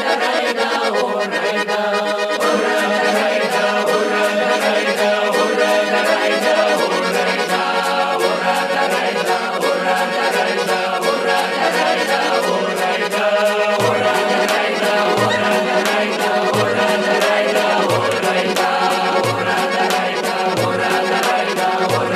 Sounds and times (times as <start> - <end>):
Music: 0.0 - 22.1.